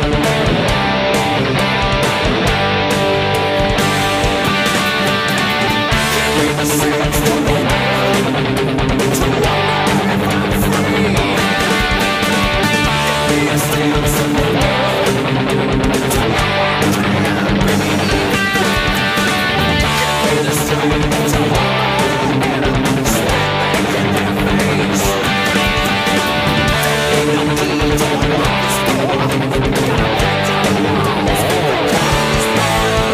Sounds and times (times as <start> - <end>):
Bass guitar: 0.0 - 33.1.